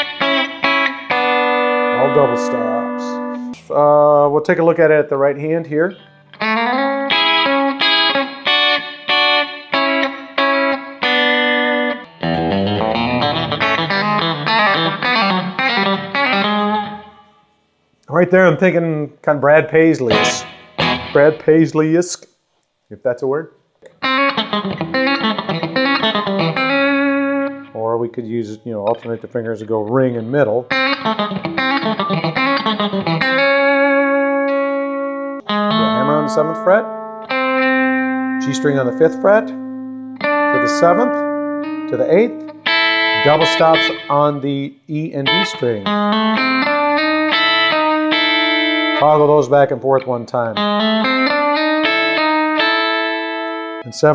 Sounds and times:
Bass guitar: 0.0s - 8.4s, 9.8s - 17.1s, 20.0s - 21.7s, 23.8s - 54.1s
Speech: 2.0s - 6.0s, 18.1s - 20.4s, 21.2s - 22.2s, 22.9s - 23.6s, 27.8s - 30.7s, 35.8s - 36.9s, 38.4s - 39.6s, 40.5s - 41.2s, 41.9s - 42.4s, 43.2s - 45.9s, 49.0s - 50.6s, 53.9s - 54.1s
Strum: 11.9s - 17.3s, 20.0s - 21.5s, 23.8s - 54.1s.

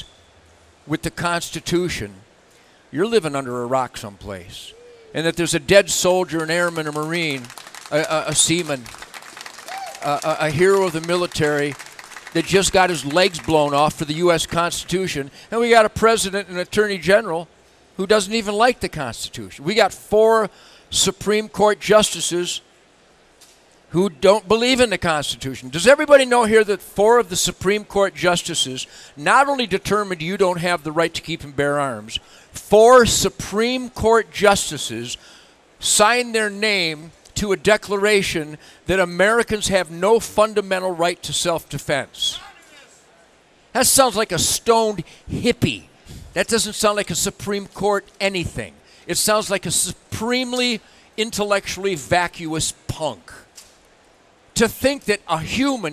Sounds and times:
Speech: 0.9s - 2.2s, 2.9s - 8.9s, 10.0s - 11.8s, 12.4s - 22.6s, 23.9s - 35.2s, 35.8s - 53.5s, 54.6s - 55.9s.

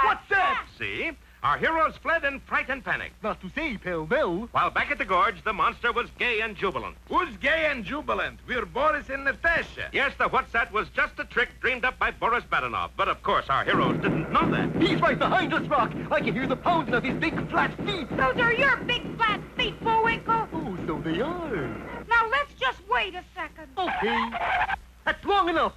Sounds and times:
Speech: 0.0s - 24.3s, 25.1s - 25.7s.

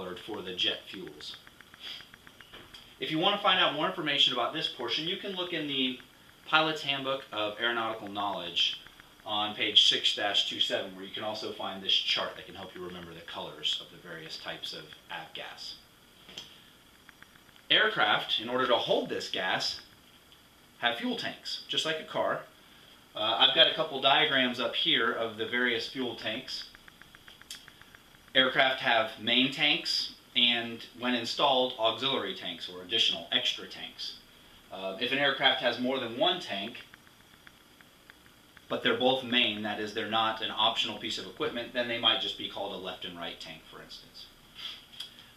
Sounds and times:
Speech: 0.0s - 1.4s, 3.0s - 15.8s, 17.7s - 19.9s, 20.8s - 22.5s, 23.2s - 26.7s, 28.4s - 36.9s, 38.7s - 44.3s.

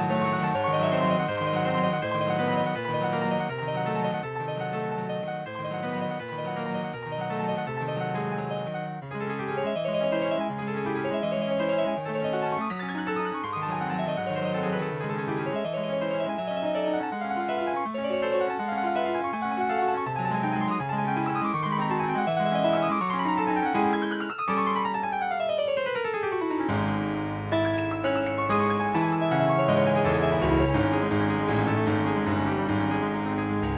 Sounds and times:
Music: 0.0s - 33.7s.

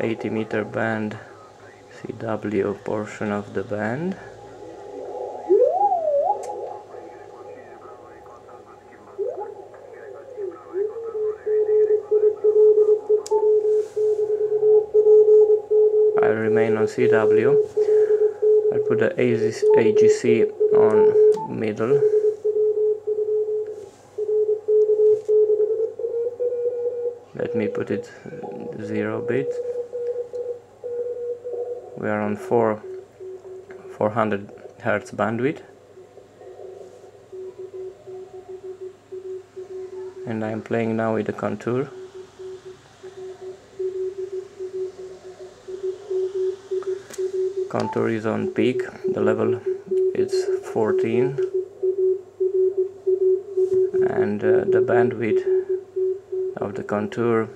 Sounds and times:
Speech: 0.0s - 4.8s, 6.7s - 12.6s, 34.0s - 35.7s, 40.0s - 41.9s, 47.8s - 49.6s, 50.2s - 51.4s, 56.6s - 57.5s
Radio: 0.0s - 13.4s, 39.7s - 44.1s, 45.4s - 51.5s, 54.0s - 55.7s.

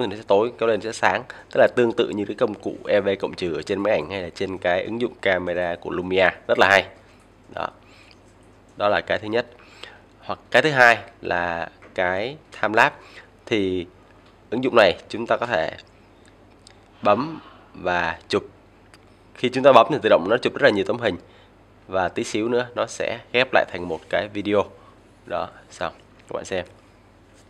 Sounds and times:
Speech: 0.0s - 7.8s, 8.8s - 9.5s, 10.2s - 13.9s, 14.5s - 15.8s, 17.0s - 18.5s, 19.4s - 21.2s, 21.9s - 26.7s.

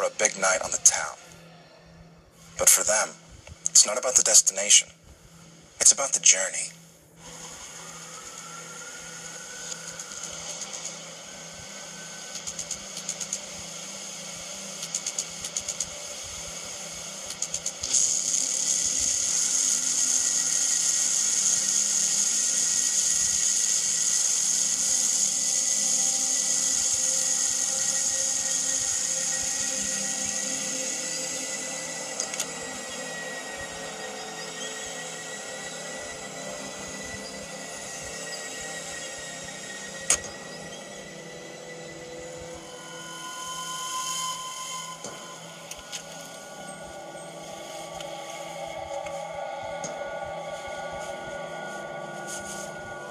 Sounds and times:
Outside, urban or manmade: 0.0s - 53.1s.

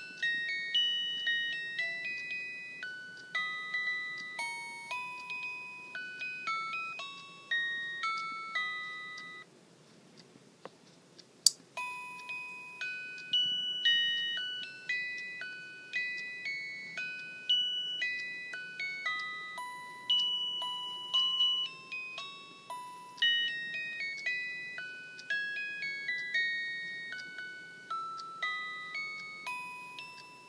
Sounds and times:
Music: 0.0s - 9.4s, 11.8s - 30.4s
Tick-tock: 9.9s - 30.4s.

